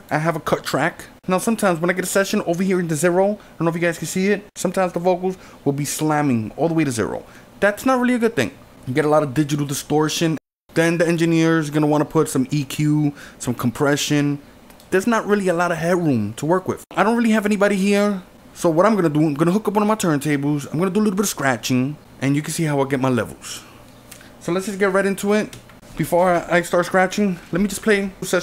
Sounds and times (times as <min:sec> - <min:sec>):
Speech: 0:00.0 - 0:23.7, 0:24.4 - 0:28.4.